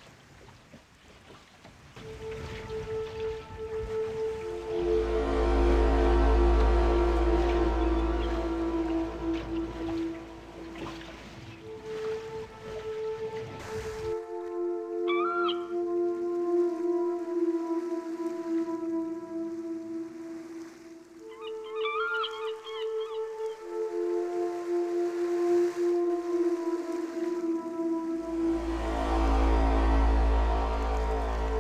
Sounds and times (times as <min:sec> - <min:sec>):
Music: 0:02.0 - 0:31.6.